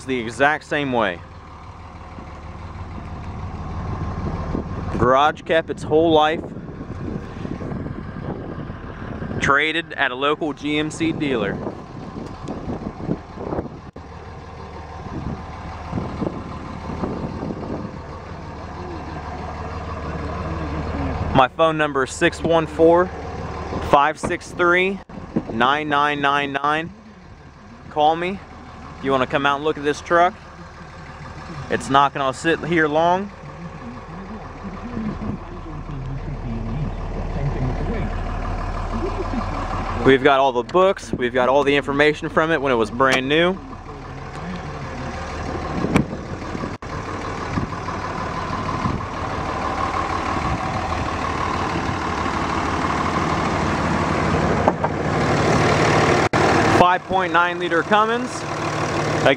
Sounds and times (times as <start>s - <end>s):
Speech: 0.0s - 1.2s, 5.0s - 6.4s, 9.4s - 11.6s, 20.1s - 23.1s, 23.9s - 38.2s, 38.9s - 45.7s, 56.8s - 58.4s
Vehicle: 0.0s - 59.3s.